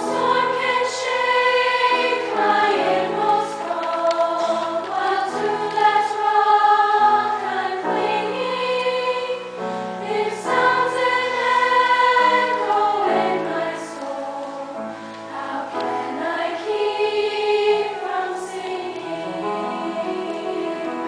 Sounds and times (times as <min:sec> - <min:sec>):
Choir: 0:00.0 - 0:21.0.